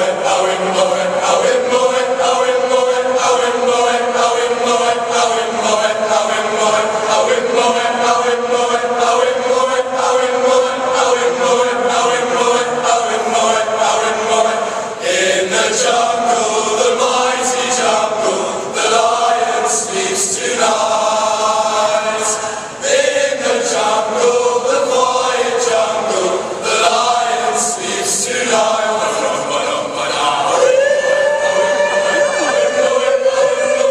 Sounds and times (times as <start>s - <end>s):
Choir: 0.0s - 33.9s.